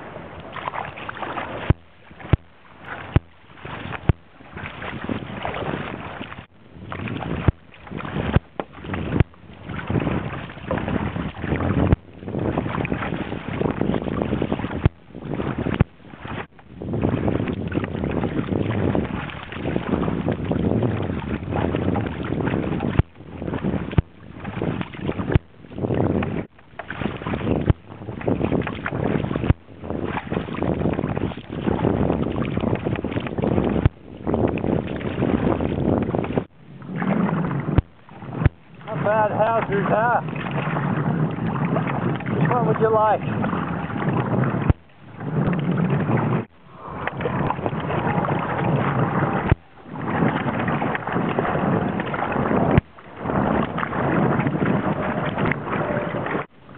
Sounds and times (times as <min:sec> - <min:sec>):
Outside, rural or natural: 0:00.0 - 0:56.7
Rowboat, canoe, kayak: 0:00.0 - 0:56.7.